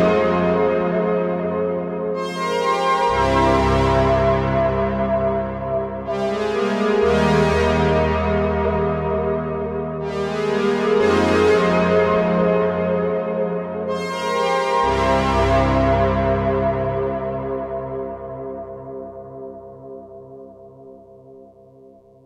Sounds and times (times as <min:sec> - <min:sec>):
Music: 0:00.0 - 0:22.2.